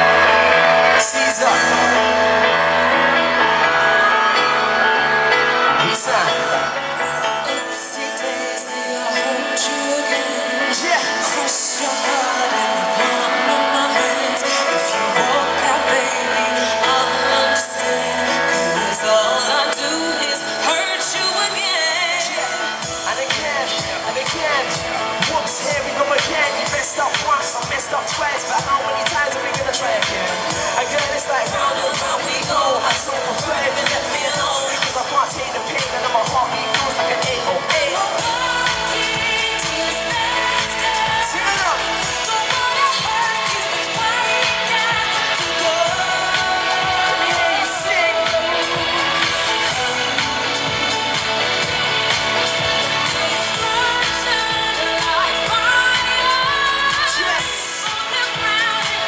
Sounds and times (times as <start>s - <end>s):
Music: 0.0s - 59.0s.